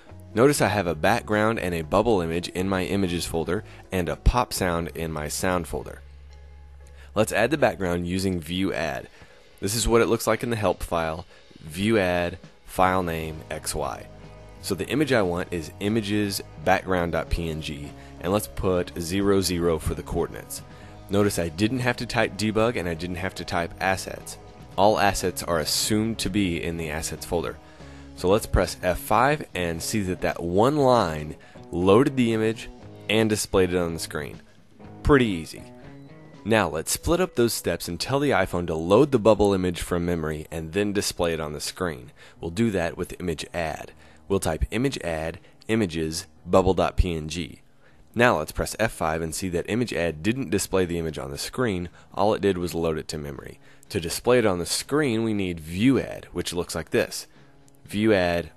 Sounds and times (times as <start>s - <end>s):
Speech: 0.3s - 6.0s, 7.1s - 27.6s, 28.2s - 34.4s, 35.0s - 35.7s, 36.4s - 47.6s, 48.2s - 58.5s.